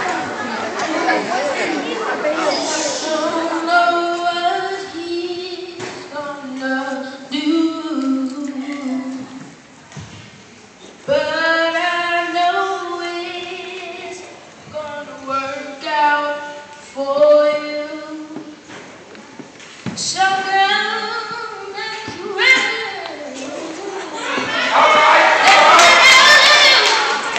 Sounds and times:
Child singing: 3.0 - 9.5.

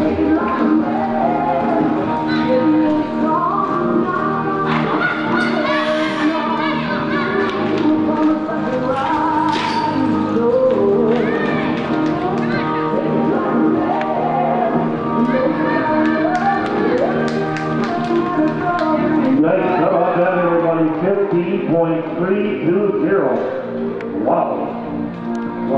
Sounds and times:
Music: 0.0 - 25.7.

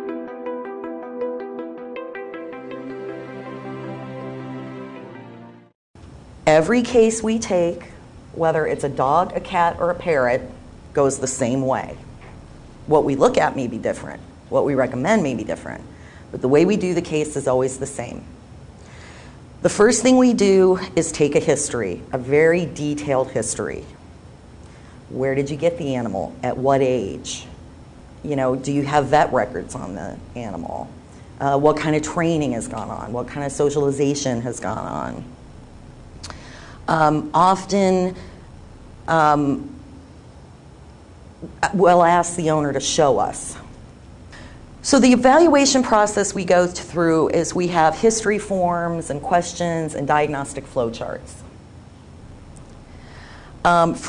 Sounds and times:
Music: 0.0 - 5.8
Speech: 6.5 - 12.0, 12.9 - 18.3, 19.6 - 24.0, 25.1 - 27.6, 28.2 - 35.3, 36.9 - 38.2, 39.1 - 39.7, 41.4 - 43.7, 44.8 - 51.5, 53.7 - 54.0.

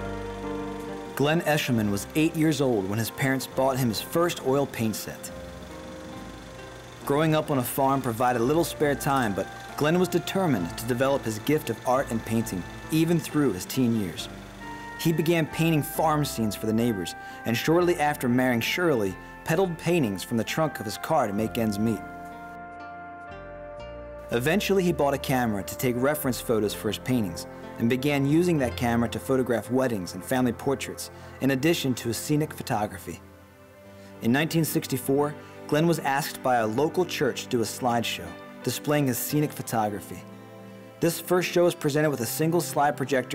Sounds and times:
Music: 0.0 - 43.3
Speech: 1.2 - 5.3, 7.0 - 14.3, 15.0 - 22.1, 24.3 - 33.2, 34.2 - 40.3, 41.0 - 43.3.

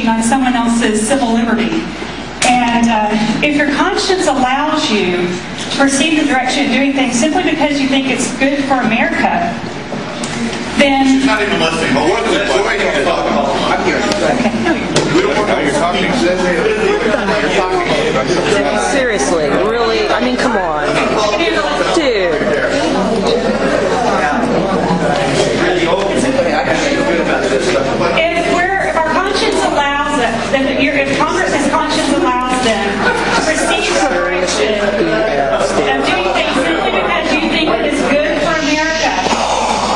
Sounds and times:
Speech: 0.0 - 9.6, 10.4 - 39.9.

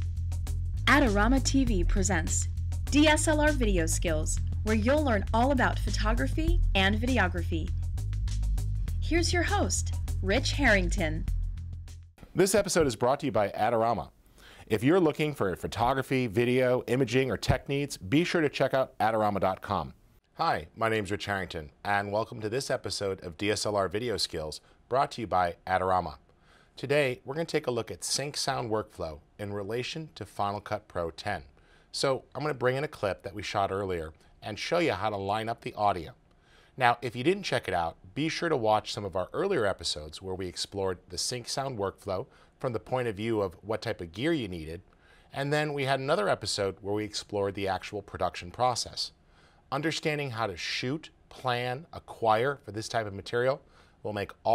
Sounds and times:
Speech: 0.9 - 7.7, 9.0 - 11.2, 12.3 - 26.2, 26.8 - 36.2, 36.8 - 54.5.

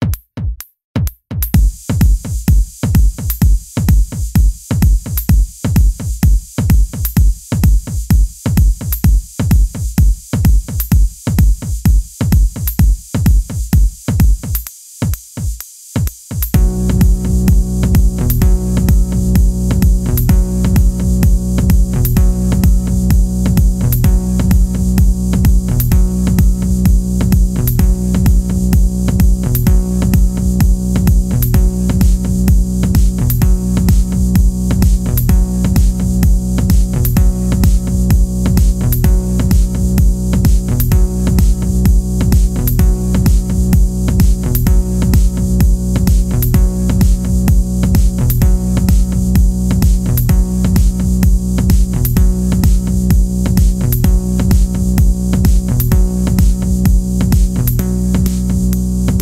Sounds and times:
Music: 0.0 - 59.2.

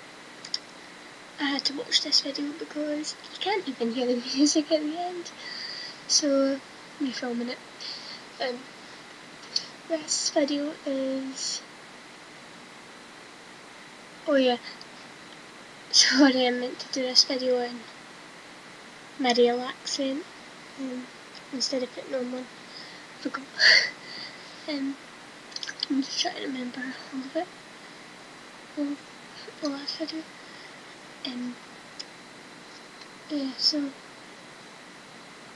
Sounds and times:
Speech: 1.4 - 8.6, 9.5 - 11.6, 14.3 - 14.8, 15.9 - 17.9, 19.2 - 24.0, 24.6 - 25.0, 25.6 - 27.5, 28.8 - 30.3, 31.2 - 31.6, 33.3 - 34.0.

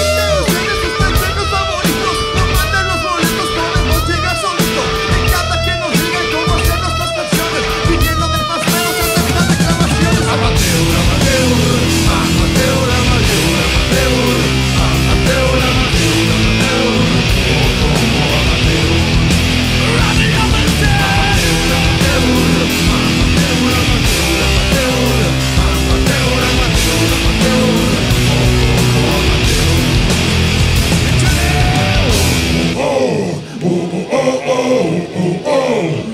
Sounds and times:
Singing: 0.0 - 30.4, 31.0 - 36.1
Punk rock: 0.0 - 36.1.

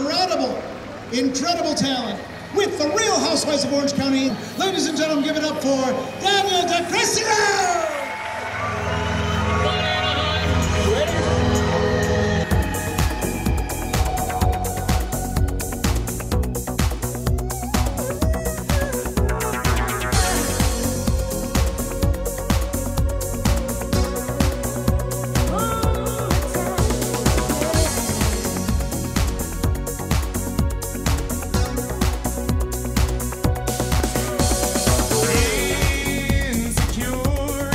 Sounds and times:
Dance music: 2.9 - 37.7.

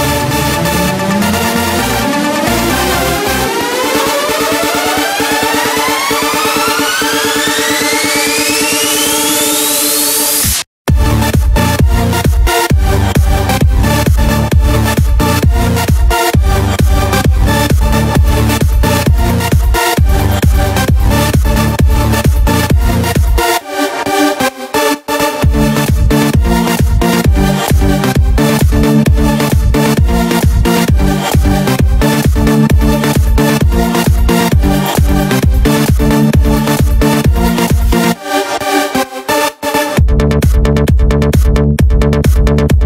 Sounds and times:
House music: 0.0 - 42.8.

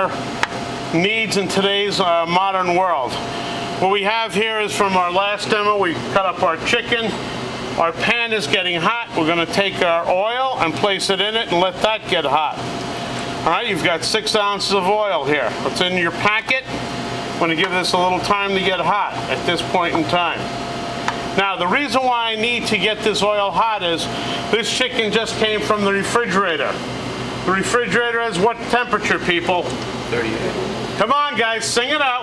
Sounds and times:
Speech: 0.9 - 3.2, 3.8 - 7.2, 7.8 - 12.6, 13.4 - 16.8, 17.4 - 20.5, 21.4 - 26.8, 27.4 - 32.2.

